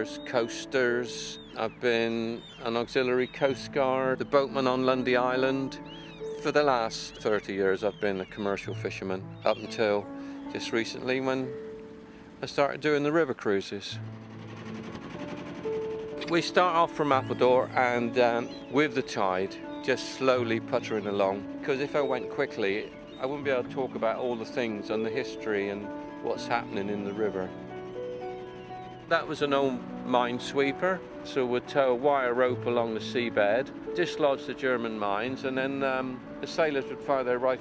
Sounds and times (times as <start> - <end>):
Speech: 0.0 - 5.8, 6.4 - 11.5, 12.4 - 14.0, 16.2 - 27.5, 29.1 - 37.6
Music: 0.0 - 37.6
Motorboat, speedboat: 6.4 - 37.6.